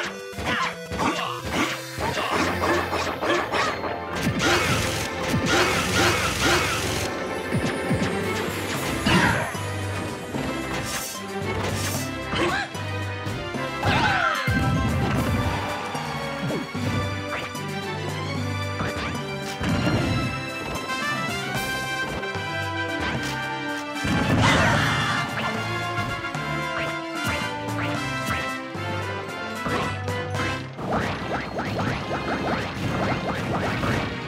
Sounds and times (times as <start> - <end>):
Music: 0.0 - 34.2.